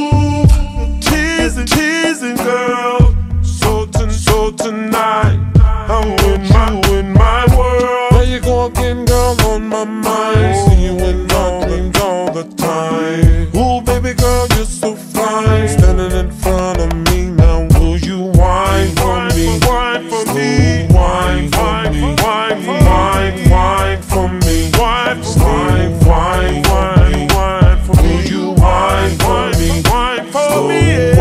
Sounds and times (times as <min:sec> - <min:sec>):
Music: 0:00.0 - 0:31.2.